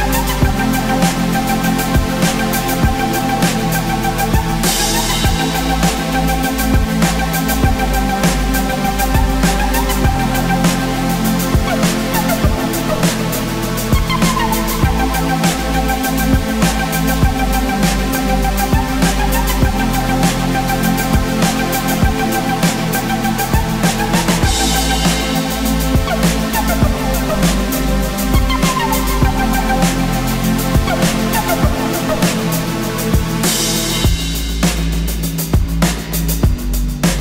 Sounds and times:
Music: 0:00.0 - 0:37.2.

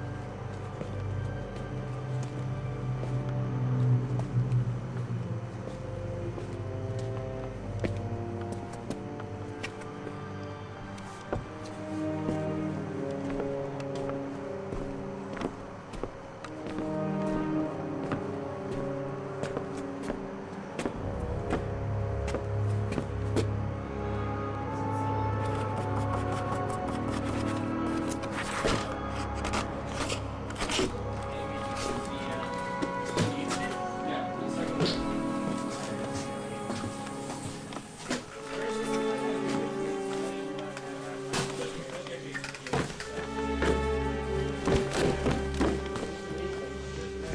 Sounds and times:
Music: 0:00.0 - 0:47.3.

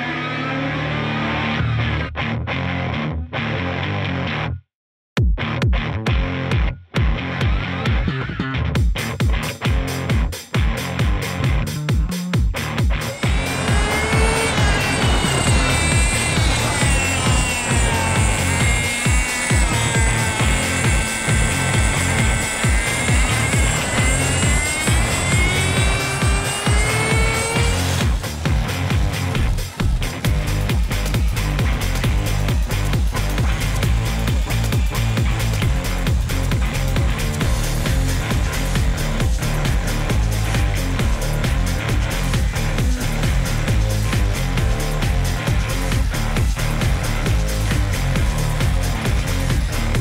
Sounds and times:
Music: 0:00.0 - 0:50.0.

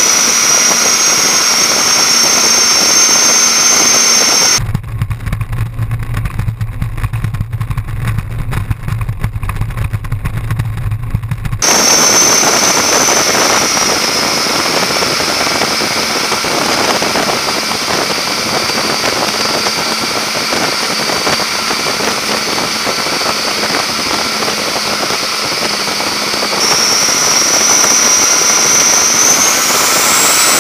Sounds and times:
Motorboat, speedboat: 0:00.0 - 0:30.6
Outside, rural or natural: 0:00.0 - 0:30.6.

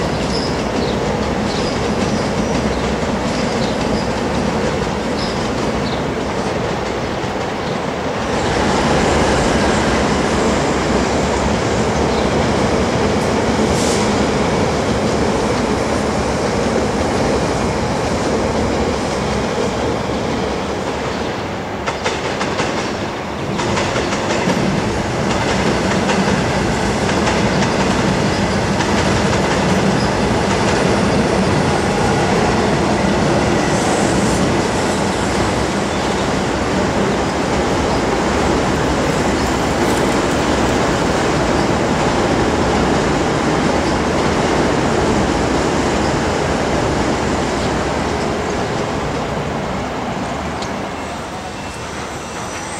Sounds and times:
Railroad car, train wagon: 0:00.0 - 0:52.7
Subway, metro, underground: 0:00.0 - 0:52.7
Train: 0:00.0 - 0:52.7.

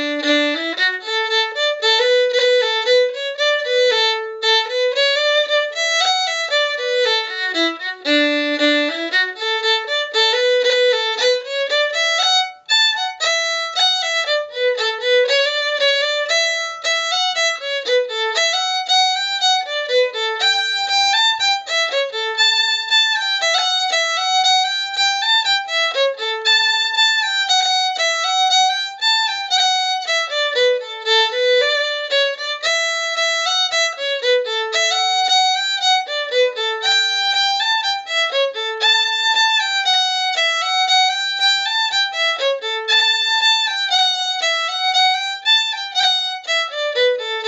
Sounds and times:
Violin, fiddle: 0:00.0 - 0:47.4.

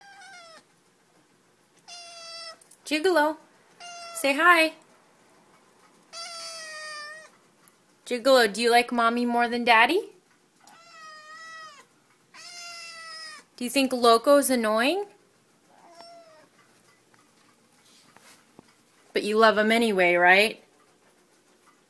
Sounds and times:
Cat: 0:00.0 - 0:00.8, 0:01.8 - 0:02.8, 0:03.7 - 0:04.3, 0:06.0 - 0:07.5, 0:10.6 - 0:13.6, 0:15.7 - 0:16.7
Speech: 0:02.9 - 0:03.4, 0:04.2 - 0:04.8, 0:08.1 - 0:10.2, 0:13.6 - 0:15.1, 0:19.1 - 0:20.6.

